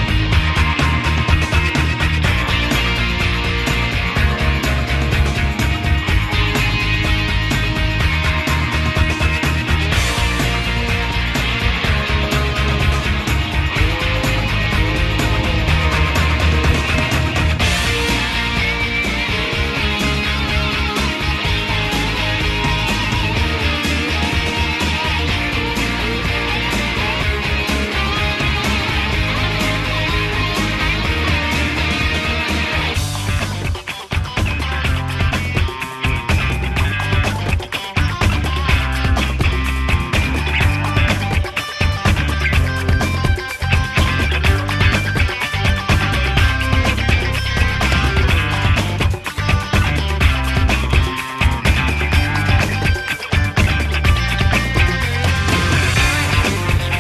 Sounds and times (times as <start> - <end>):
Music: 0.0 - 57.0.